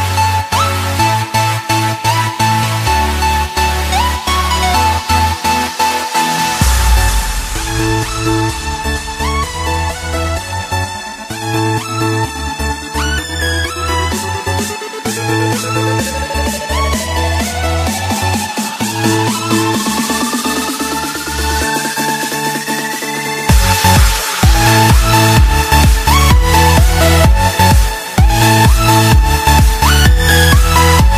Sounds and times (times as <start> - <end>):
Music: 0.0 - 31.1.